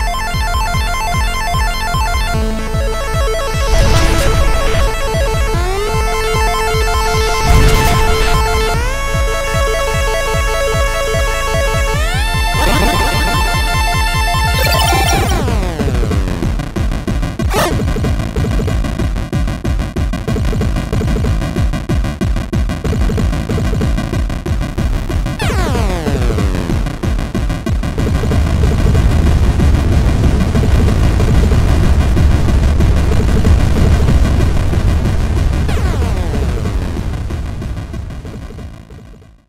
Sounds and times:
Music: 0.0 - 39.4.

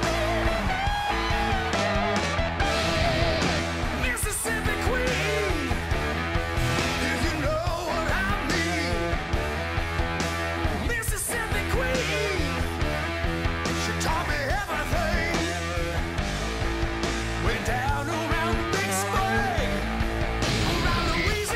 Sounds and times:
Bass guitar: 0.0 - 21.5.

